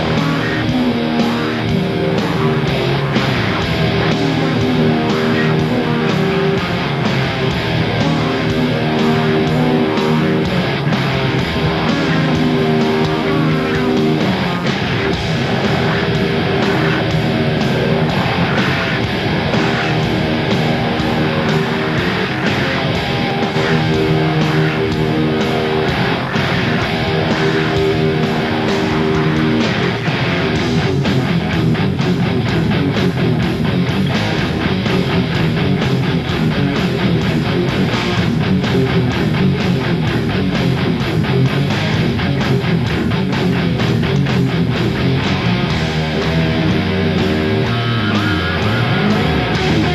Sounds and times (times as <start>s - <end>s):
Music: 0.0s - 49.9s.